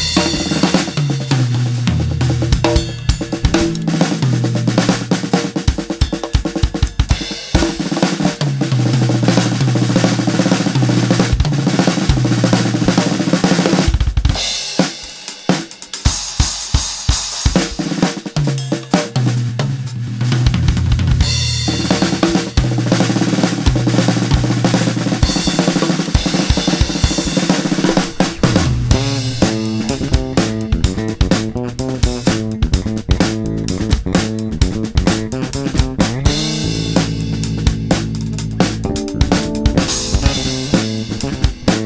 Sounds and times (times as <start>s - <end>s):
Bass drum: 0.0s - 5.9s, 19.5s - 41.8s
Bass guitar: 0.0s - 14.1s, 19.2s - 41.8s
Drum and bass: 0.0s - 18.6s, 19.2s - 41.8s
Snare drum: 0.0s - 19.2s, 21.8s - 41.8s
Drum kit: 0.0s - 41.8s.